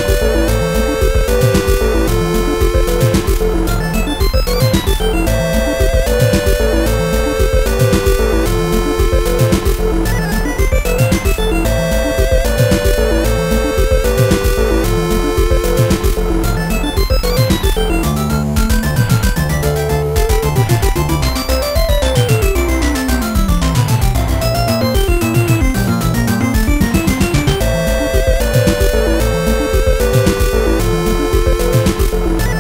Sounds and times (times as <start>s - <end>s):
Video game music: 0.0s - 32.6s.